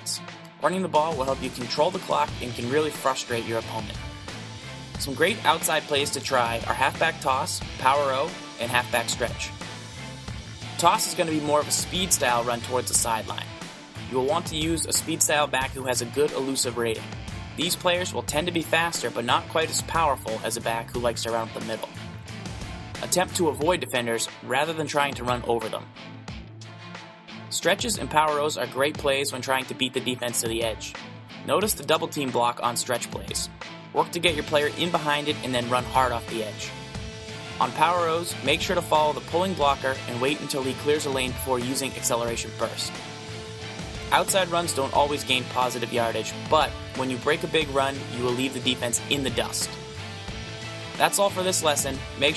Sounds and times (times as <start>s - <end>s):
Speech: 0.0s - 4.0s, 5.0s - 9.5s, 10.8s - 17.0s, 17.6s - 22.0s, 23.0s - 25.9s, 27.5s - 36.8s, 37.6s - 43.0s, 44.1s - 49.8s, 51.0s - 52.3s
Music: 0.0s - 52.3s.